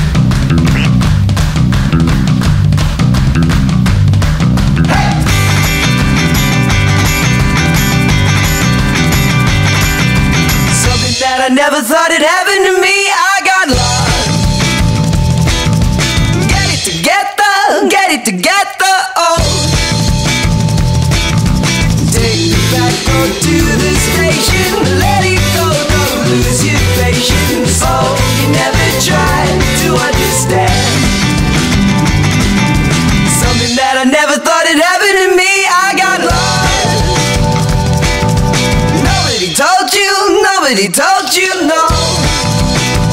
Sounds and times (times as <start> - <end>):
Music: 0.0 - 43.1.